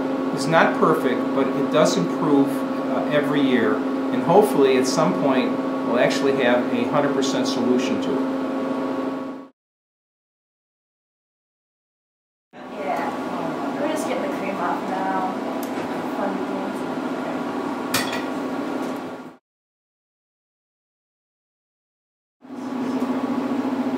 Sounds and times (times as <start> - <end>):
Speech: 0.4 - 8.3, 12.6 - 15.4, 16.1 - 17.5.